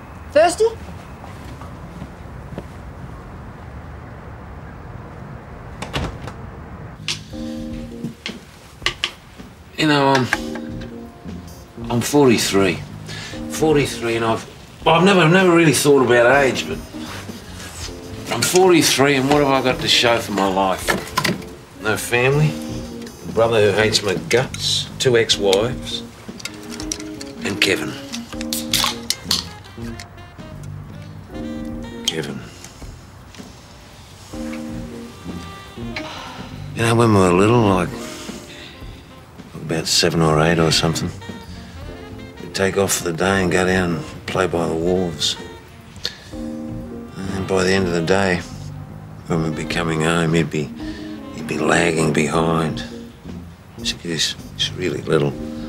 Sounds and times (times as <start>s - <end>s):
Music: 7.0s - 55.6s.